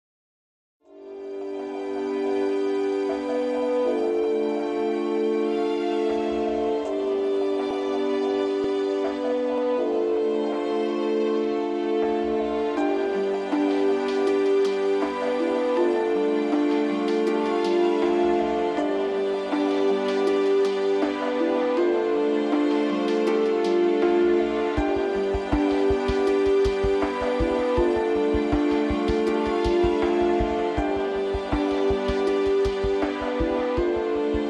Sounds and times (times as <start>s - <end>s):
Background music: 0.8s - 34.4s.